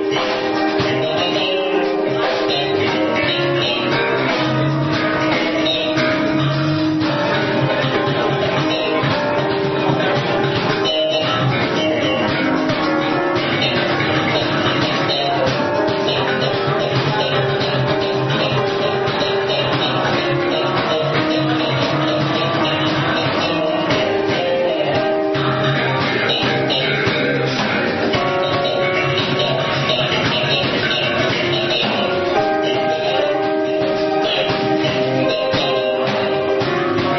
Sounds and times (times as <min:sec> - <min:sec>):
Bass guitar: 0:00.0 - 0:37.1.